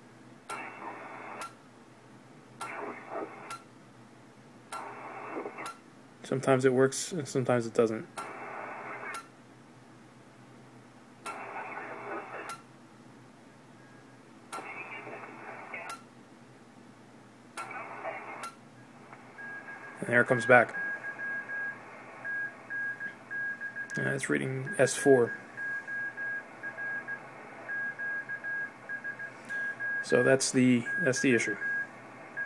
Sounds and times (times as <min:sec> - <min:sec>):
Radio: 0:00.5 - 0:01.5, 0:02.6 - 0:03.6, 0:04.8 - 0:05.8, 0:08.2 - 0:09.1, 0:11.3 - 0:12.6, 0:14.6 - 0:16.0, 0:17.6 - 0:23.2, 0:23.9 - 0:32.4
Speech: 0:06.2 - 0:08.1, 0:20.0 - 0:20.7, 0:24.0 - 0:25.4, 0:30.0 - 0:31.6.